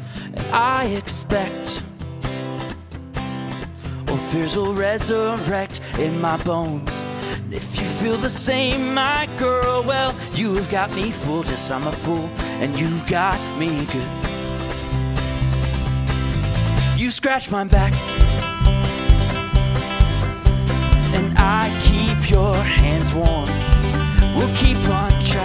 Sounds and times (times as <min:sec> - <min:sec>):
Music: 0:00.0 - 0:25.4.